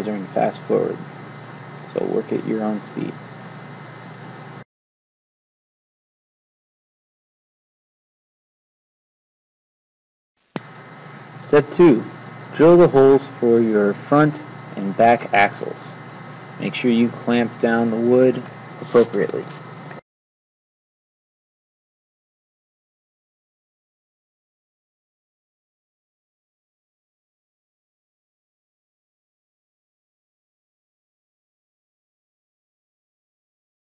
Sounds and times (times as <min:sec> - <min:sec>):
Speech: 0:00.0 - 0:01.0, 0:01.9 - 0:03.2, 0:11.4 - 0:16.0, 0:16.6 - 0:19.5.